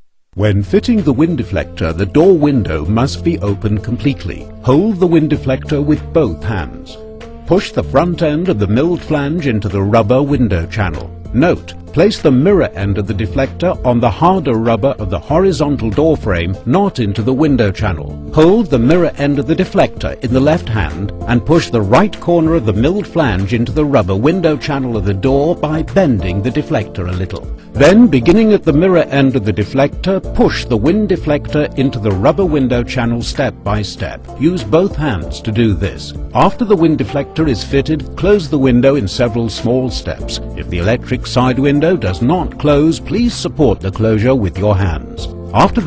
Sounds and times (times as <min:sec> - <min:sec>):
Music: 0:00.0 - 0:45.8
Speech: 0:00.4 - 0:45.8.